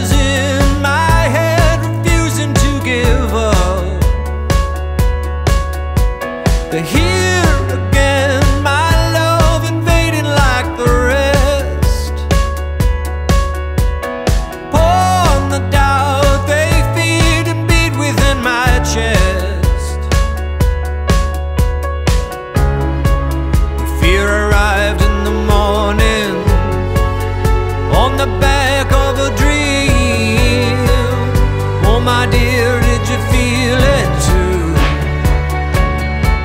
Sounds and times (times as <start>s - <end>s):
Music: 0.0s - 36.4s.